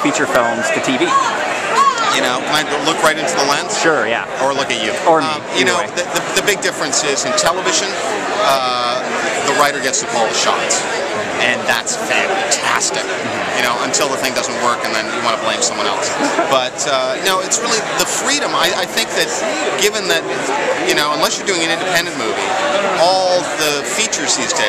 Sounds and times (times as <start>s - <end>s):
Speech: 0.0s - 1.2s, 2.0s - 24.6s.